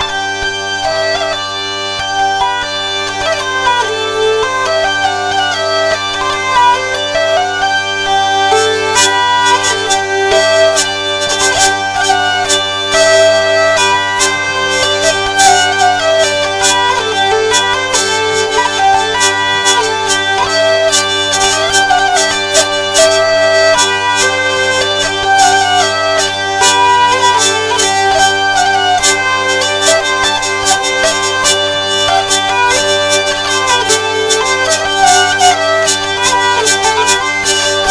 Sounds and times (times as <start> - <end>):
Plucked string instrument: 0.0 - 37.9.